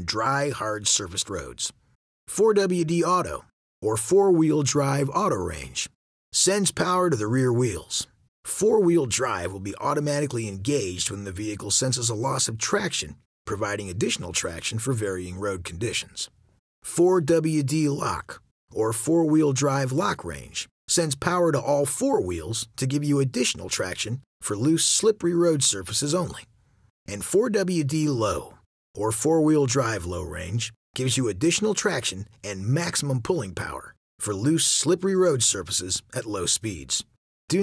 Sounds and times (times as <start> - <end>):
Speech: 0.0 - 26.5, 27.1 - 37.6.